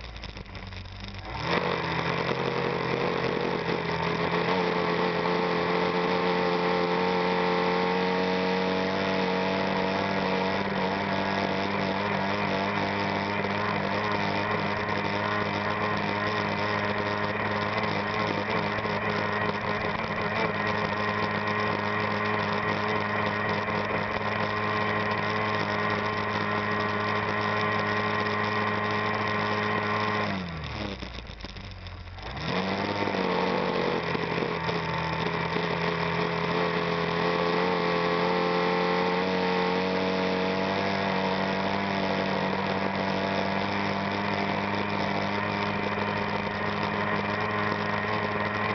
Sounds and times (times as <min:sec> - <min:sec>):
Motorboat, speedboat: 0:01.0 - 0:31.1, 0:32.2 - 0:48.7.